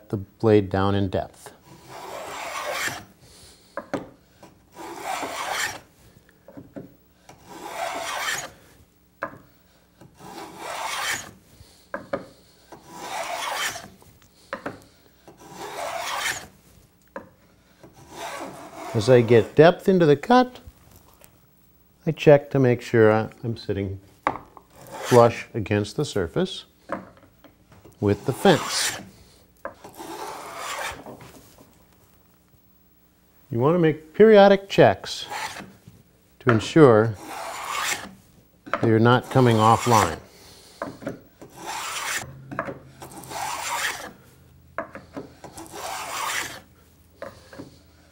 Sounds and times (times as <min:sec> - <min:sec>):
Filing (rasp): 0:01.6 - 0:03.1, 0:04.7 - 0:05.8, 0:07.4 - 0:08.6, 0:10.2 - 0:11.4, 0:12.7 - 0:14.0, 0:15.3 - 0:16.5, 0:17.9 - 0:19.2, 0:24.8 - 0:25.4, 0:28.2 - 0:29.2, 0:29.8 - 0:31.1, 0:35.2 - 0:35.7, 0:37.2 - 0:38.2, 0:39.2 - 0:40.2, 0:40.8 - 0:42.3, 0:43.0 - 0:44.2, 0:45.1 - 0:46.7.